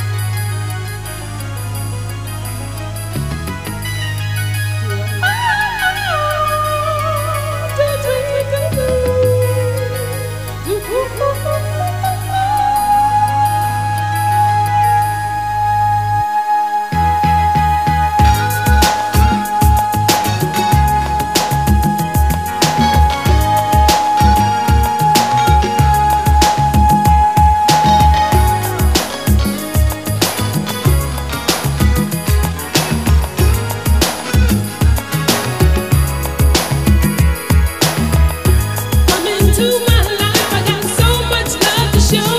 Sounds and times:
Pop music: 0.0s - 15.2s, 17.0s - 42.3s.

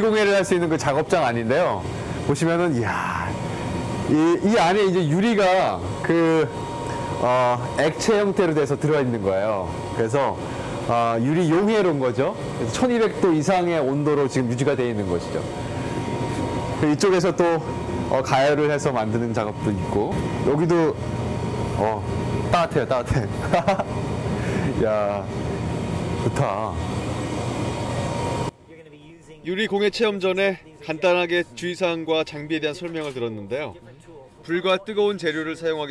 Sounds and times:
Speech: 0.0s - 3.4s, 4.1s - 6.6s, 7.2s - 15.5s, 16.8s - 21.0s, 21.8s - 23.4s, 24.8s - 25.3s, 26.2s - 26.8s, 28.6s - 35.9s.

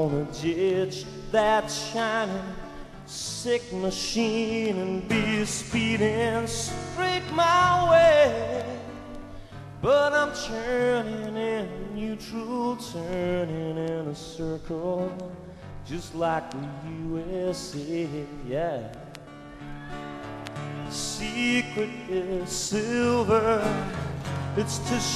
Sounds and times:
Music: 0.0s - 25.1s.

